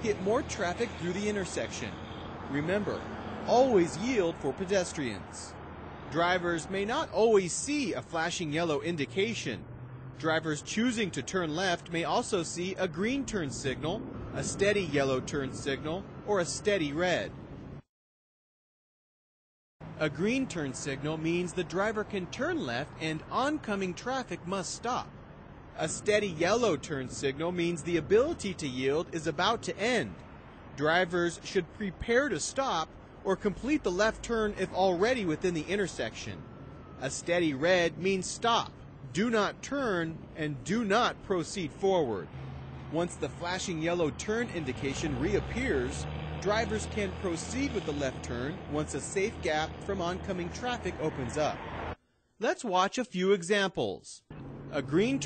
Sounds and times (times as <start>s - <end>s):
Speech: 0.0s - 9.6s, 10.2s - 17.3s, 20.0s - 25.1s, 25.8s - 30.2s, 30.8s - 36.4s, 37.0s - 42.3s, 42.9s - 51.6s, 52.4s - 55.2s.